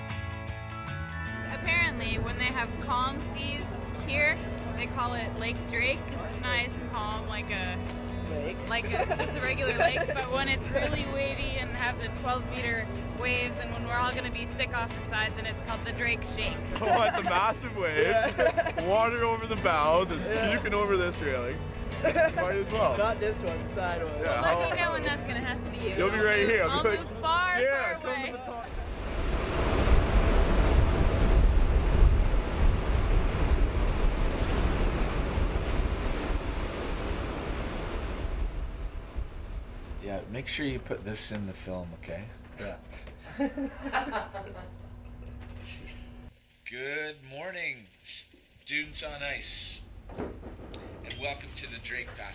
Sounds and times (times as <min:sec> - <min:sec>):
Waves, surf: 0:28.6 - 0:40.3
Wind noise (microphone): 0:28.7 - 0:40.0.